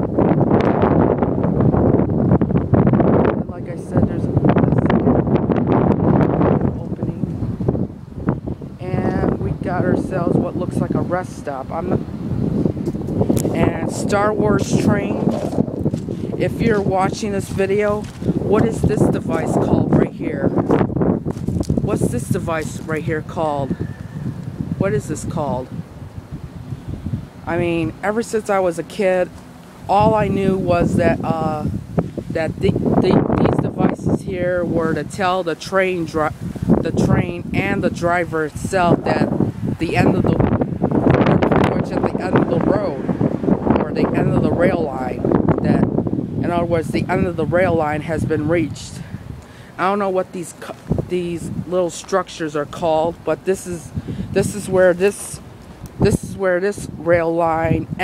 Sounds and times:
Wind: 0.0 - 58.0
Speech: 3.4 - 4.9, 6.6 - 7.3, 8.8 - 12.0, 13.5 - 15.6, 16.4 - 20.6, 21.9 - 23.8, 24.8 - 25.7, 27.5 - 29.3, 29.9 - 31.7, 32.4 - 40.4, 41.3 - 43.1, 43.8 - 49.1, 49.8 - 55.4, 56.0 - 58.0.

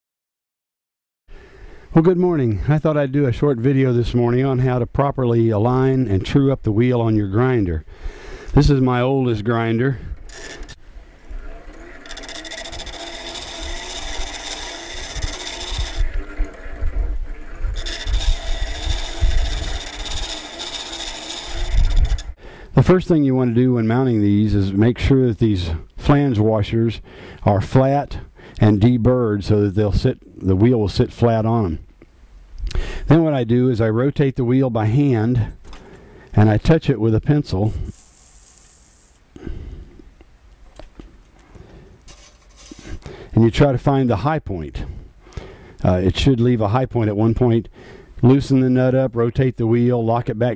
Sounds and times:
Speech: 2.0 - 7.8, 8.6 - 10.0, 22.8 - 31.8, 33.1 - 35.6, 36.4 - 37.9, 43.4 - 44.9, 45.8 - 50.5.

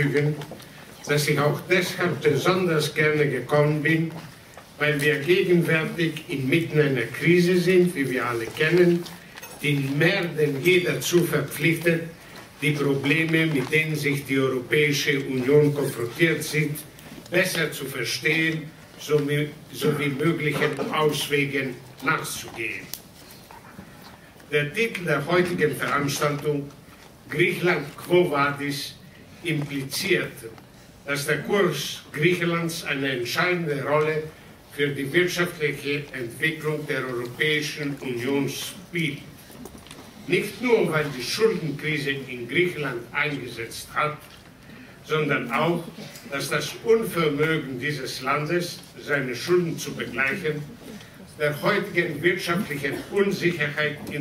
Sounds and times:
Male speech, man speaking: 0.0 - 22.9, 24.5 - 26.7, 27.3 - 39.3, 40.3 - 44.3, 45.0 - 50.7, 51.4 - 54.2
Narration, monologue: 0.0 - 54.2.

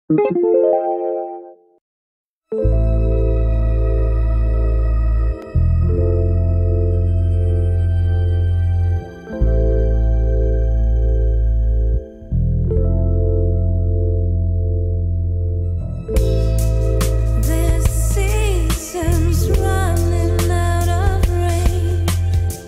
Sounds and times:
New-age music: 0.1 - 1.8, 2.5 - 22.6.

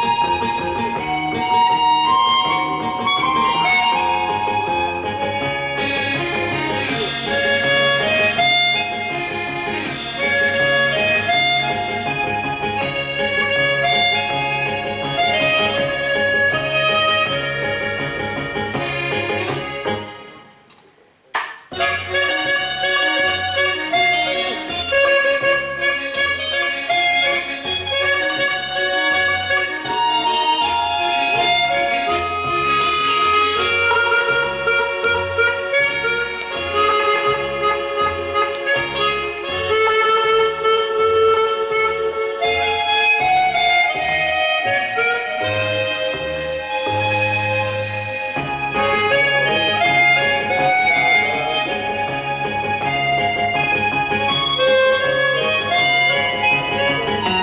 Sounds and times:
Harmonica: 0.0 - 20.7, 21.8 - 57.4
Wind instrument, woodwind instrument: 0.0 - 20.7, 21.7 - 57.4.

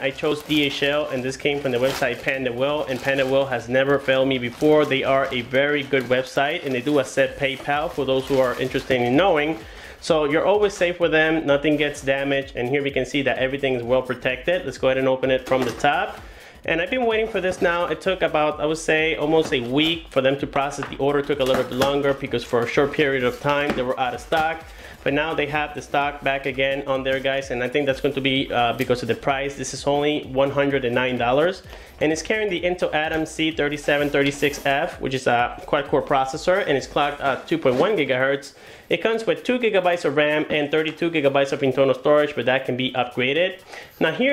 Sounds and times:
Speech: 0.0 - 44.3.

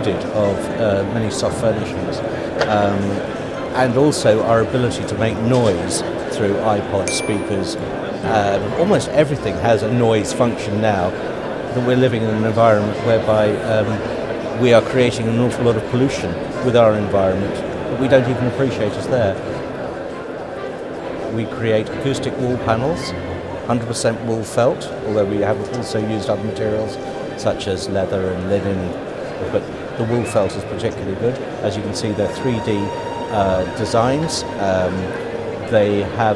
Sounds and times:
Speech: 0.0 - 19.6, 21.3 - 36.3
Music: 0.0 - 36.3.

